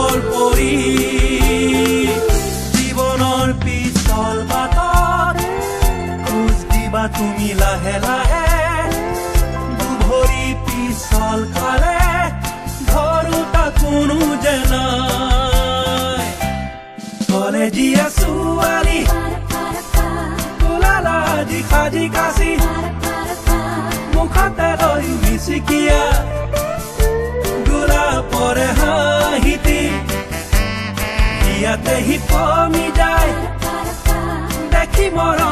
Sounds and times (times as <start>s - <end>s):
Music of Africa: 0.0s - 35.5s.